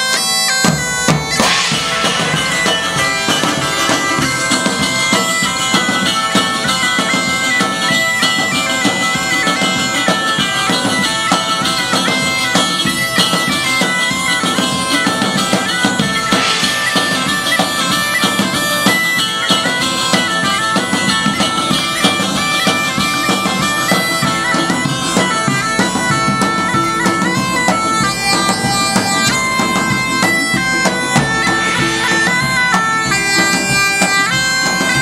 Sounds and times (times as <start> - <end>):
Bagpipes: 0.0 - 35.0
Wind instrument, woodwind instrument: 0.0 - 35.0.